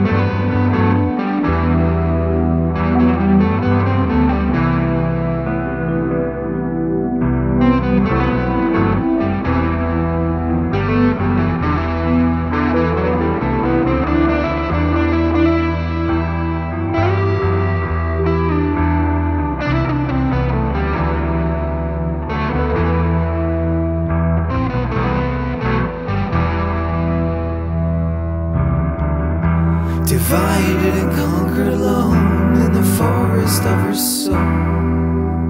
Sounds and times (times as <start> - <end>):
Music: 0.0 - 35.4.